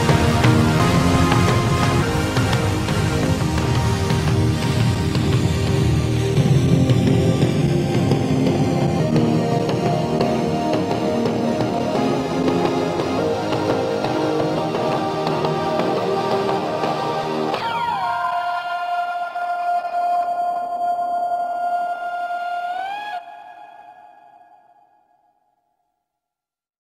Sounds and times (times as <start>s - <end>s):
Music: 0.0s - 25.2s.